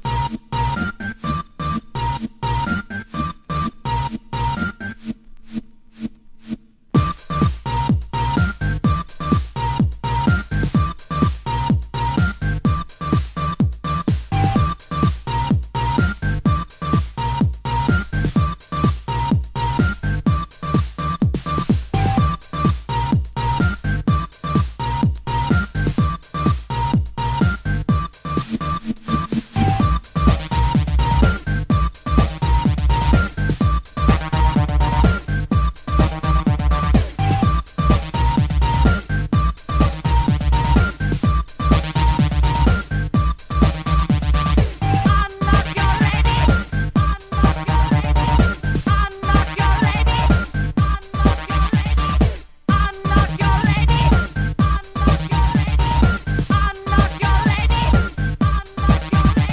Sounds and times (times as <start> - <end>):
Techno: 0.0 - 5.2, 6.0 - 59.5.